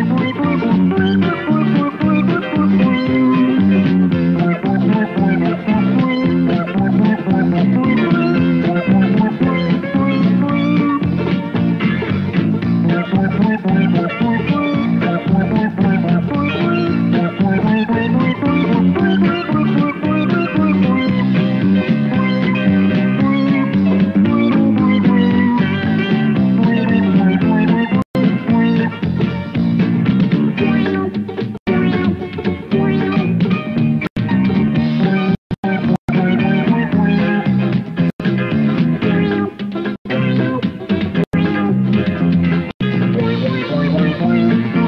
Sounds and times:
Music: 0.0 - 44.8.

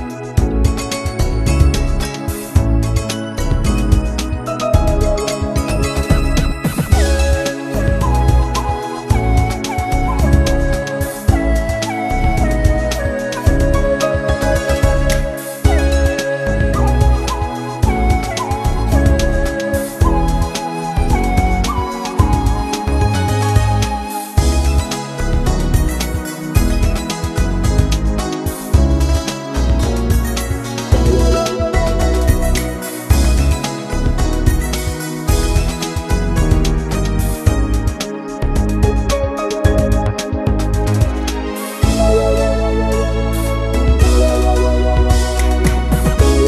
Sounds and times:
Music: 0.0 - 46.4.

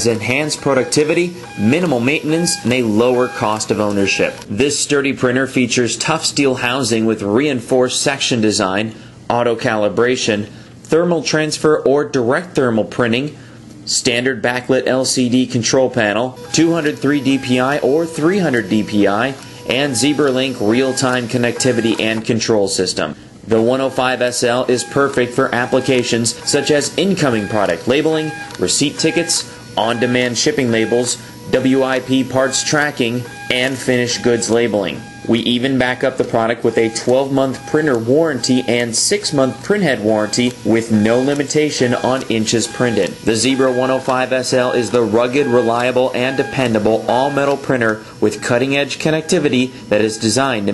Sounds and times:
Printer: 0.0 - 4.6, 16.4 - 22.5, 23.5 - 50.7
Speech: 0.0 - 50.7.

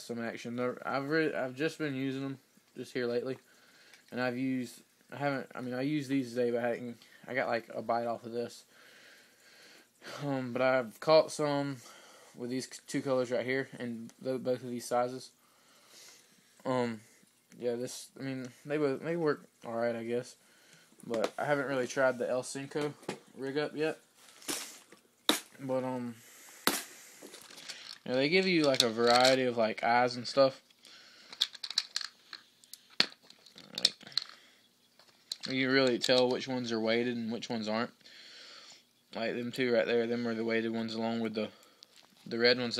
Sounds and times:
Speech: 0.0 - 3.4, 4.1 - 8.7, 10.1 - 11.8, 12.4 - 15.4, 16.6 - 17.0, 17.6 - 20.4, 21.0 - 24.0, 25.6 - 26.2, 28.0 - 30.6, 35.5 - 38.0, 39.2 - 41.6, 42.3 - 42.7.

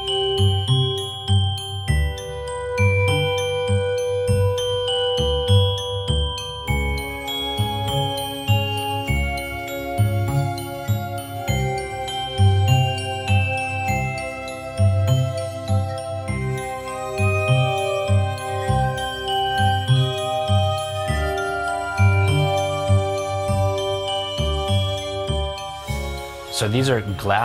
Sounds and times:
Jingle, tinkle: 0.0 - 27.4
Music: 0.0 - 27.4.

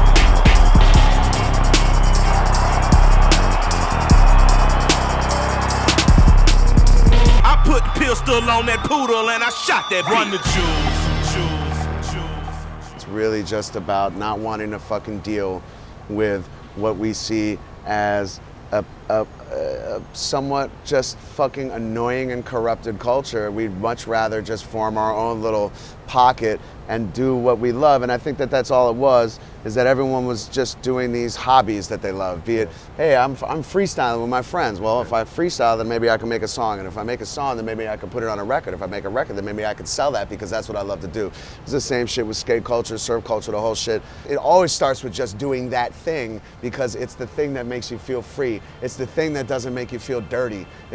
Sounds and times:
Music: 0.0 - 15.2.

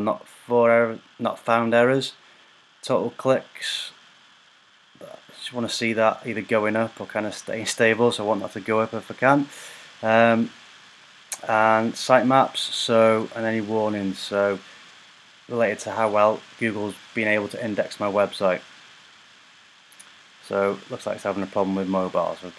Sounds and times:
Speech: 0.0 - 2.2, 2.8 - 3.9, 5.0 - 10.5, 11.4 - 14.6, 15.5 - 18.6, 20.4 - 22.5.

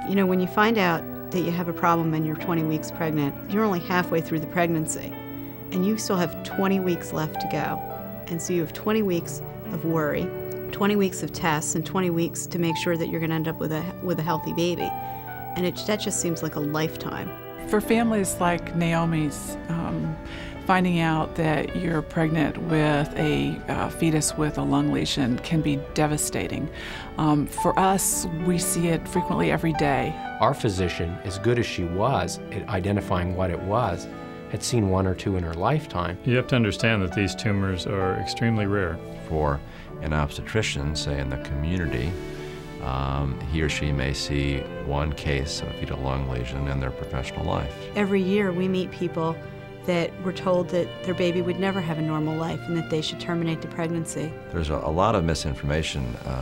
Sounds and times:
Music: 0.0 - 56.4.

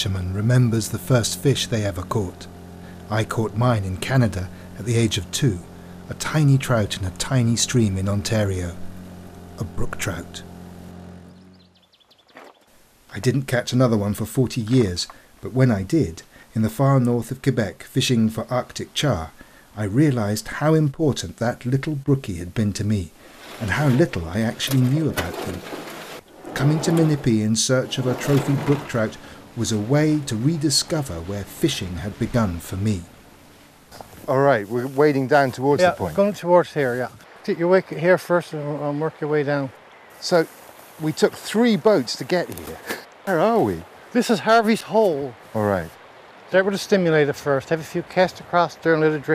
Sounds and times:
Speech: 0.0 - 2.5, 3.1 - 8.8, 9.6 - 10.5, 13.1 - 25.6, 26.6 - 33.1, 34.3 - 49.3.

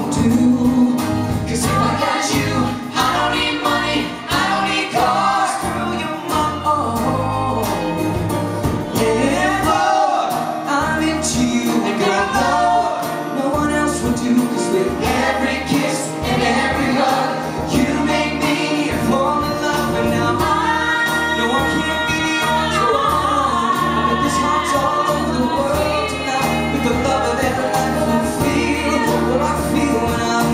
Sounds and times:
Singing: 0.0 - 8.2, 8.9 - 30.5
Inside, large room or hall: 0.0 - 30.5
Music: 0.0 - 30.5.

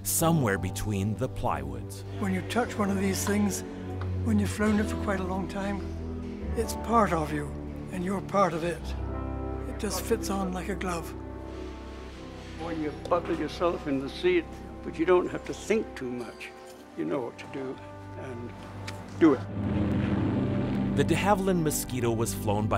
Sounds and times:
Music: 0.0 - 22.7.

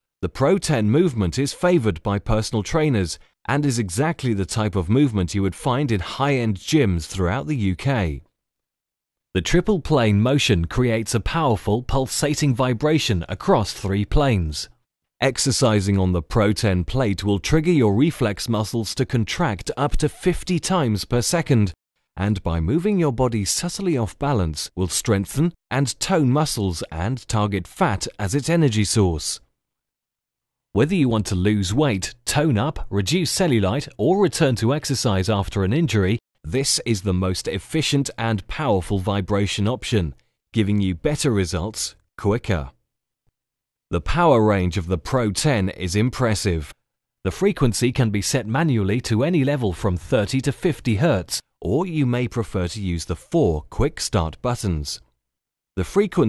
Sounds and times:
Speech: 0.2 - 8.3, 9.4 - 29.5, 30.8 - 42.8, 43.9 - 55.1, 55.8 - 56.2.

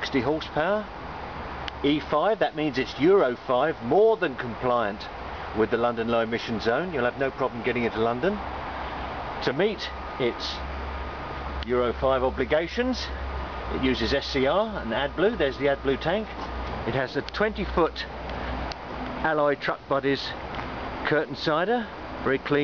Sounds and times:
Speech: 0.0 - 0.9, 1.8 - 8.5, 9.4 - 10.7, 11.6 - 18.2, 19.2 - 20.4, 21.0 - 22.6.

